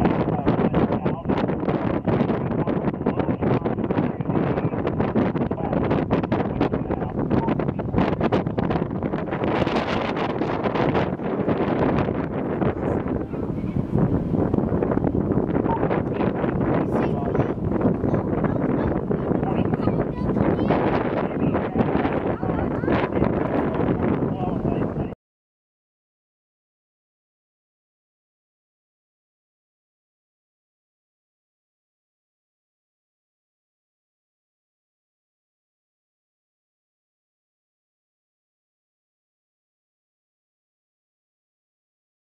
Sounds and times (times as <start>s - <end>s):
Speech: 0.0s - 1.4s, 2.5s - 4.8s, 5.4s - 5.9s, 6.5s - 7.8s, 12.8s - 14.0s, 15.6s - 25.2s
Helicopter: 0.0s - 24.5s
Wind noise (microphone): 0.0s - 25.2s.